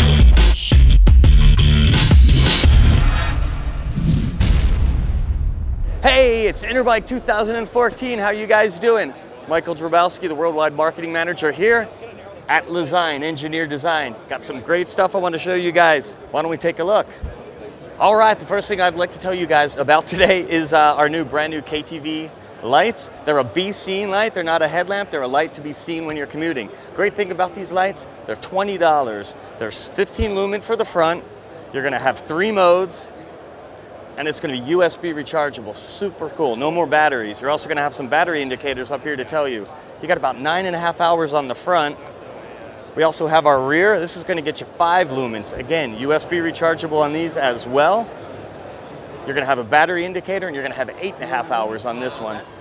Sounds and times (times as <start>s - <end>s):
Speech: 6.0s - 33.2s, 34.2s - 48.1s, 49.3s - 52.6s.